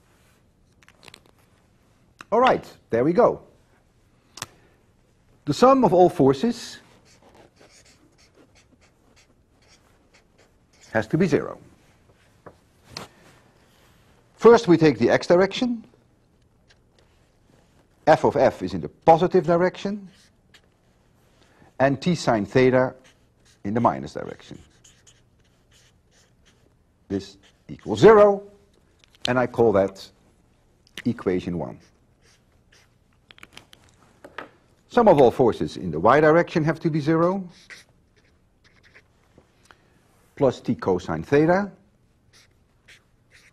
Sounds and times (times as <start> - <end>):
Speech: 2.3 - 3.6, 5.5 - 6.9, 10.9 - 11.7, 14.4 - 15.9, 18.1 - 20.2, 21.8 - 23.1, 23.7 - 24.7, 27.1 - 28.6, 29.3 - 30.2, 31.0 - 31.9, 34.9 - 37.6, 40.4 - 41.8
Writing: 7.0 - 11.3, 19.4 - 21.0, 21.8 - 28.4, 31.7 - 33.0, 37.2 - 39.1, 42.3 - 43.5.